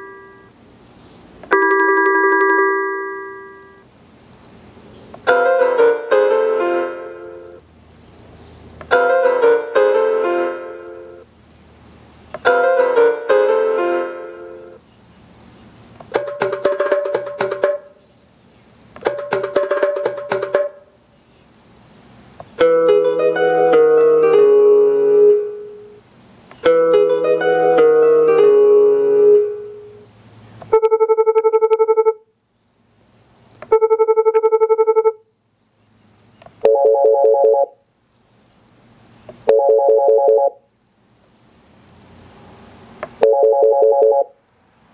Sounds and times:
Ringtone: 0:00.0 - 0:00.5, 0:01.5 - 0:03.8, 0:05.3 - 0:07.6, 0:08.9 - 0:11.2, 0:12.5 - 0:14.8, 0:16.2 - 0:18.0, 0:19.1 - 0:20.9, 0:22.6 - 0:26.0, 0:26.6 - 0:30.1, 0:30.7 - 0:32.2, 0:33.7 - 0:35.2, 0:36.6 - 0:37.8, 0:39.5 - 0:40.7, 0:43.2 - 0:44.4
Music: 0:05.3 - 0:07.6, 0:09.0 - 0:11.2, 0:12.5 - 0:14.8, 0:16.2 - 0:18.0, 0:19.1 - 0:20.9, 0:22.6 - 0:26.0, 0:26.7 - 0:30.0
Dial tone: 0:30.8 - 0:32.2, 0:33.7 - 0:35.2, 0:36.6 - 0:37.8, 0:39.5 - 0:40.6, 0:43.2 - 0:44.4.

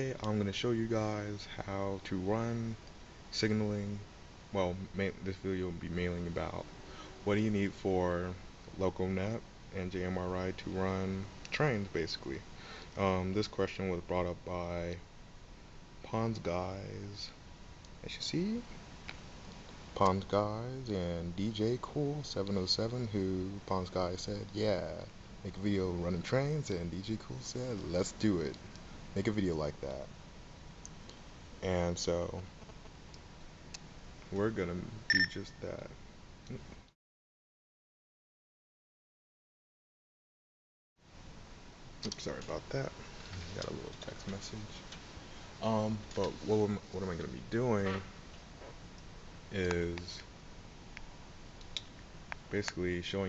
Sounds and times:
Speech: 0:00.0 - 0:12.4, 0:13.0 - 0:15.0, 0:16.0 - 0:17.4, 0:18.0 - 0:18.8, 0:20.0 - 0:28.6, 0:29.2 - 0:30.1, 0:31.6 - 0:32.5, 0:34.3 - 0:36.7, 0:42.0 - 0:44.9, 0:45.6 - 0:48.1, 0:49.5 - 0:50.3, 0:52.5 - 0:53.2.

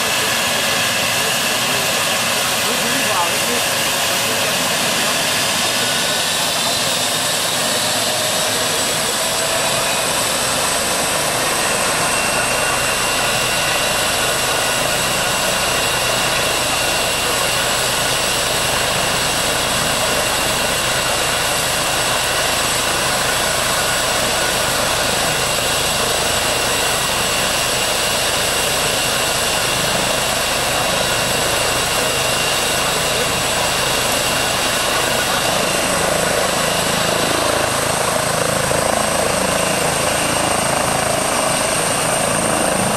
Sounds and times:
Helicopter: 0:00.0 - 0:42.9.

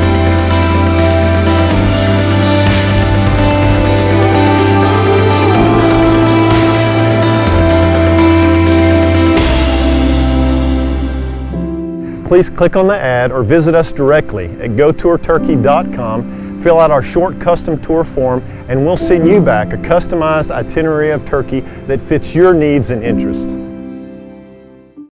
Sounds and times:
Music: 0:00.0 - 0:25.1
Speech: 0:12.3 - 0:23.6.

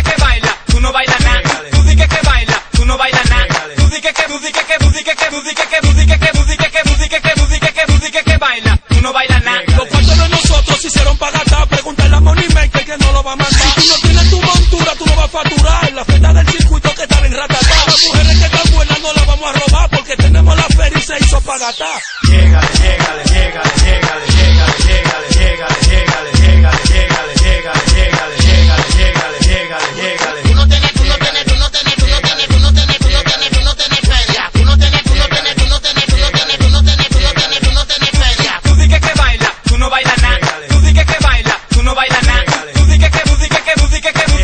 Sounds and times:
Music: 0:00.0 - 0:44.4.

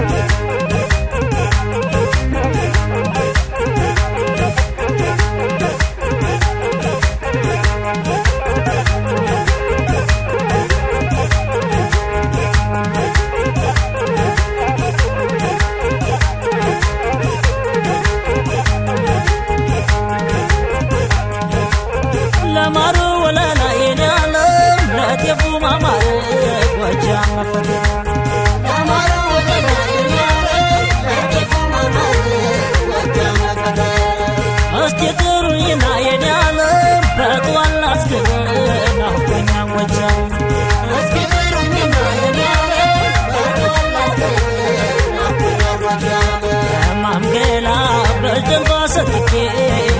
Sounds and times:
Music: 0:00.0 - 0:49.9.

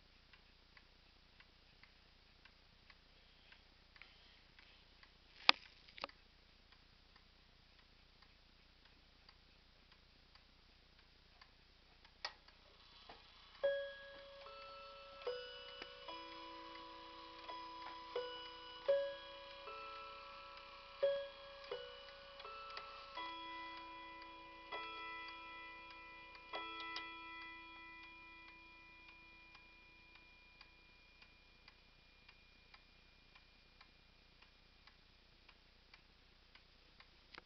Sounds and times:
Tick-tock: 0:06.0 - 0:37.4.

